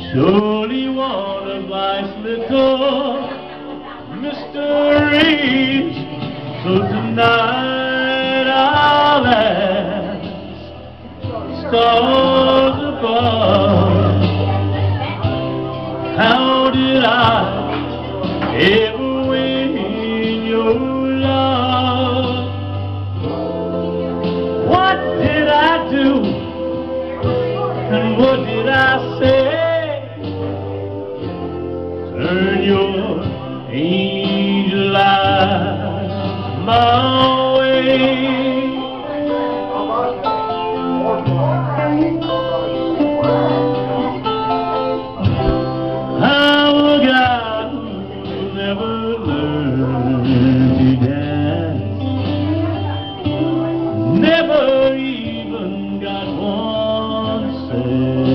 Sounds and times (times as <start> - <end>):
Male singing: 0.0 - 15.2, 16.0 - 30.6, 32.0 - 44.2, 46.2 - 58.3
Music: 0.0 - 58.3
Speech: 0.1 - 10.3, 11.2 - 22.5, 23.8 - 30.6, 32.1 - 44.4.